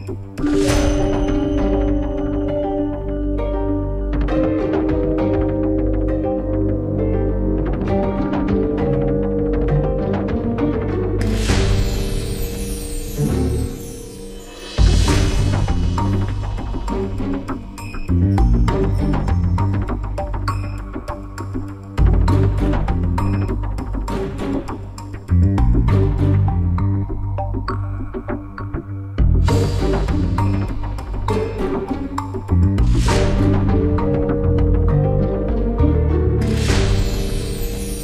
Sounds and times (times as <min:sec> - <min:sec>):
Theme music: 0:00.0 - 0:27.6, 0:29.2 - 0:38.0.